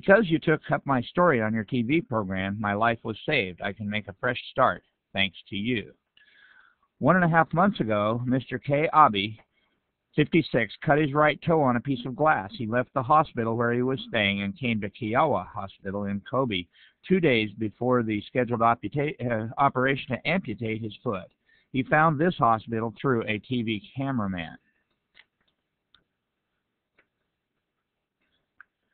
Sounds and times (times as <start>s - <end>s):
Speech: 0.0s - 6.0s, 7.0s - 9.5s, 10.1s - 24.6s.